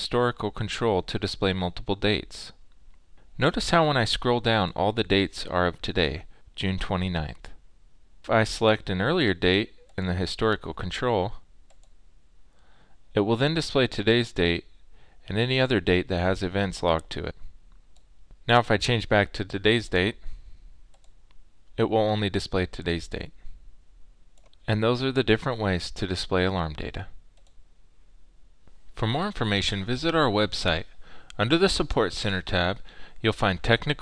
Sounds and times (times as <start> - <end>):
Speech: 0.0 - 2.6, 3.4 - 7.6, 8.2 - 11.5, 13.1 - 17.5, 18.4 - 20.3, 21.8 - 23.4, 24.6 - 27.2, 29.0 - 34.0.